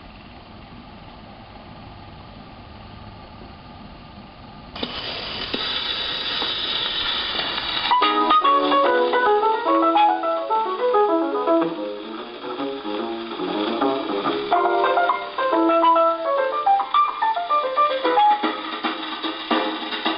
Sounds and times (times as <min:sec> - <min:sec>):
Independent music: 0:07.8 - 0:20.1.